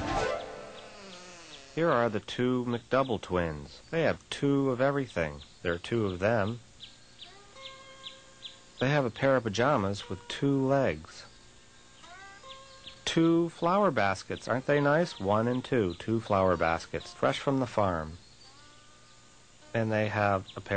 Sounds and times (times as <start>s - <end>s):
Music: 0.0s - 1.2s, 7.2s - 20.7s
Speech: 1.8s - 6.6s, 8.8s - 11.3s, 13.1s - 18.2s, 19.7s - 20.7s.